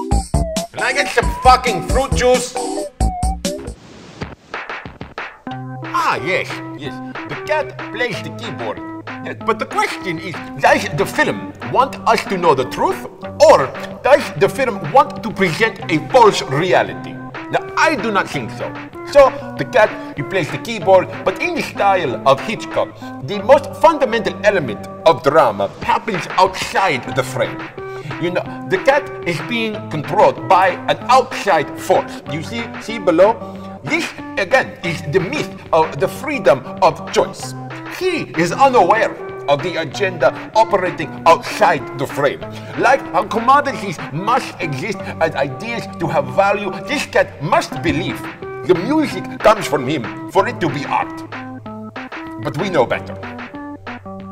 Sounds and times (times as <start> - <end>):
Speech: 0.8 - 2.8, 5.9 - 51.3, 52.4 - 53.2.